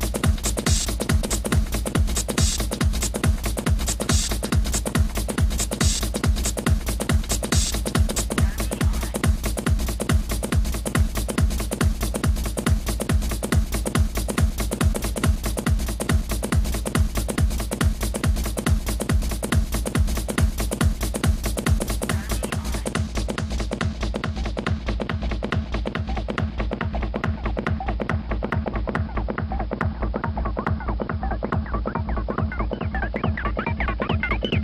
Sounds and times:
Music: 0.0 - 34.6.

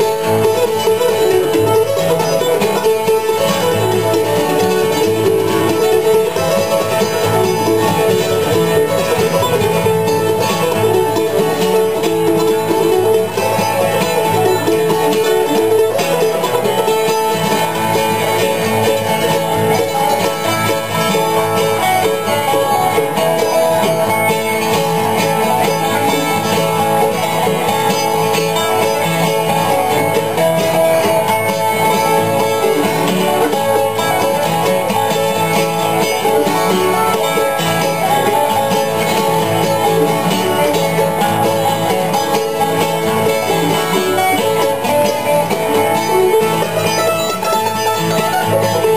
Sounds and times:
Bluegrass: 0.0 - 48.9.

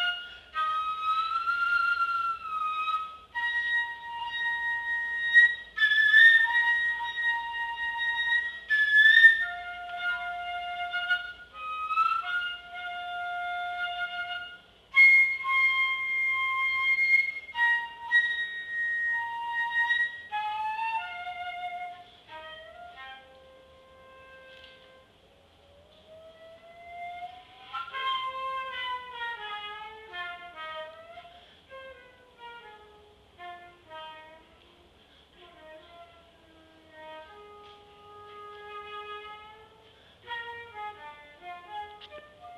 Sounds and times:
Flute: 0.0 - 42.5.

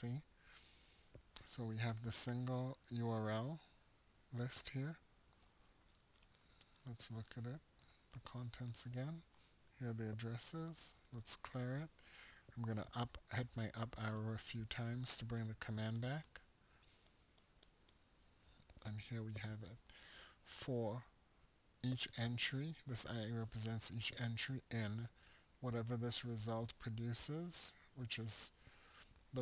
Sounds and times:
Speech: 0.0 - 0.3, 1.4 - 3.7, 4.3 - 5.0, 6.8 - 7.6, 8.2 - 11.9, 12.6 - 16.4, 18.8 - 19.8, 20.5 - 21.1, 21.8 - 28.6
Inside, small room: 0.0 - 29.4.

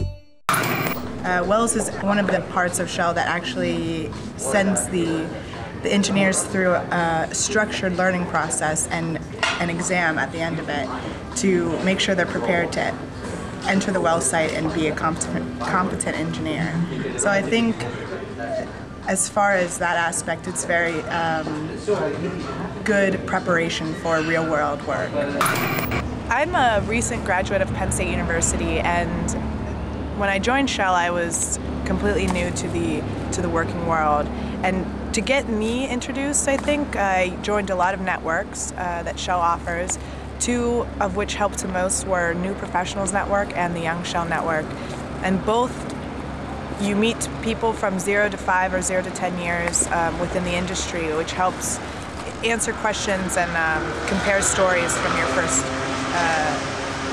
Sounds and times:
Inside, public space: 0.5 - 57.1
Speech: 1.2 - 13.0, 13.6 - 25.4, 26.3 - 29.4, 30.2 - 45.8, 46.8 - 56.6.

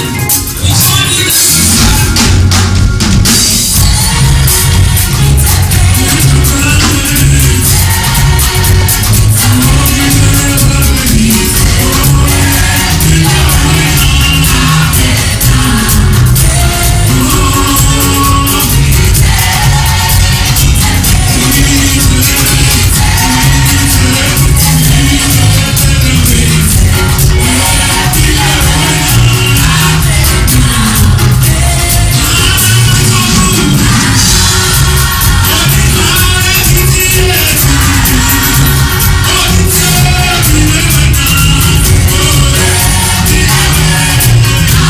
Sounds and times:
Music: 0.0 - 44.9.

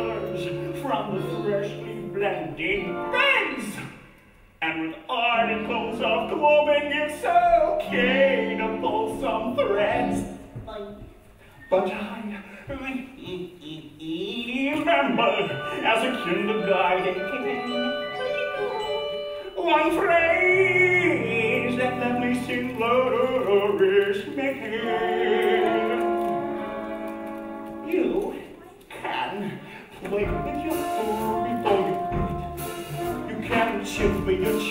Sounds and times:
Speech: 0.0 - 3.9, 11.7 - 18.8, 27.8 - 32.1
Music: 0.0 - 11.8, 14.4 - 28.8, 29.8 - 34.7.

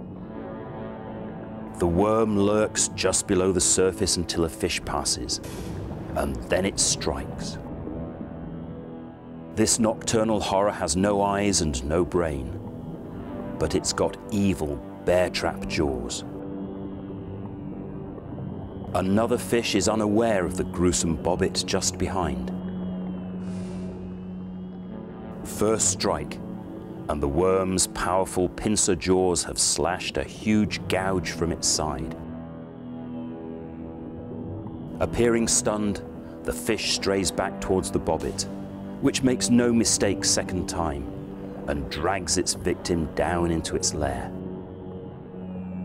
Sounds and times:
Speech: 1.8 - 5.4, 6.2 - 7.6, 9.6 - 12.6, 13.6 - 16.3, 19.0 - 22.5, 25.5 - 26.4, 27.1 - 32.2, 35.0 - 41.1, 41.7 - 44.3.

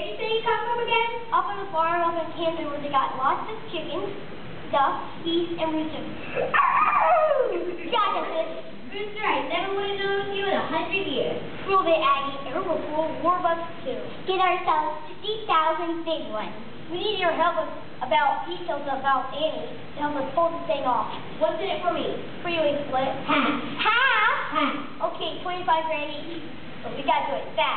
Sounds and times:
Speech: 0.0 - 6.5, 7.4 - 27.7.

